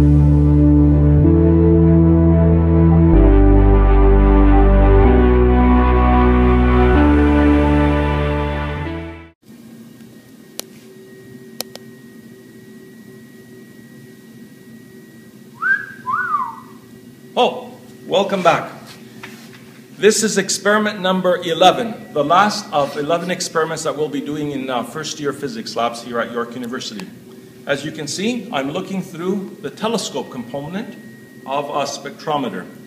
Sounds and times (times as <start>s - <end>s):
Music: 0.0s - 9.4s.